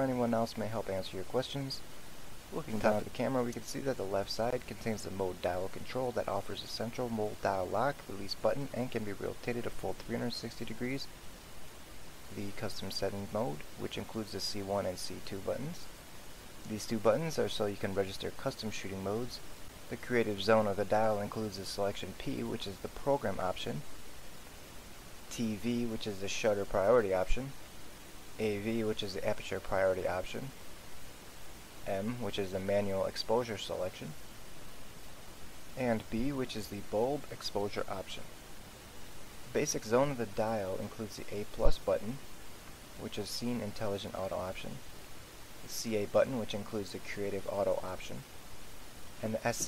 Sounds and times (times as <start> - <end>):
Speech: 0.0 - 1.8, 2.5 - 11.1, 12.3 - 15.9, 16.6 - 23.9, 25.3 - 27.6, 28.4 - 30.6, 31.8 - 34.2, 35.8 - 38.3, 39.5 - 42.2, 43.0 - 44.8, 45.7 - 48.3, 49.2 - 49.6.